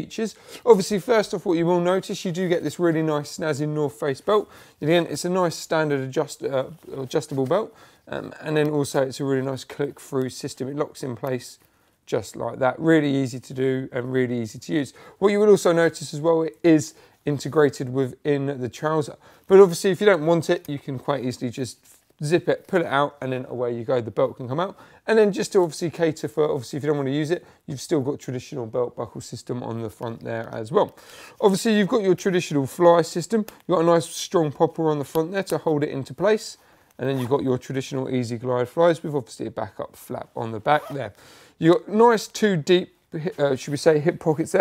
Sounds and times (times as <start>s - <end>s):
Speech: 0.0s - 44.6s.